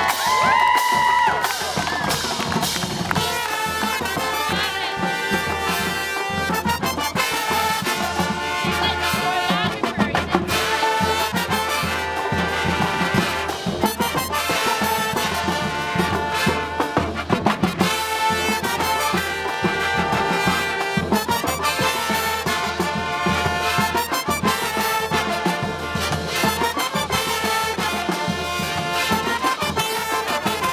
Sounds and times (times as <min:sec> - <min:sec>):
Trombone: 0:01.4 - 0:30.7.